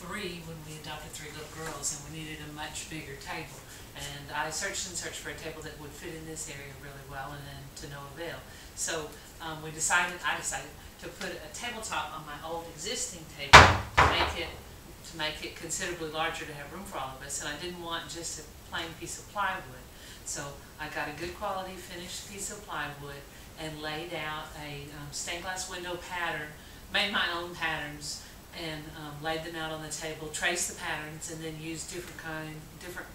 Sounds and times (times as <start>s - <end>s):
Speech: 0.0s - 33.1s.